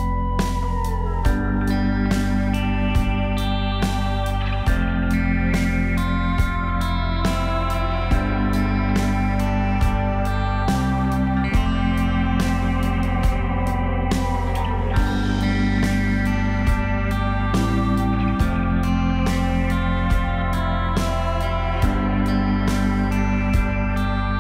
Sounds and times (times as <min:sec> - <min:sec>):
Music: 0:00.0 - 0:24.4.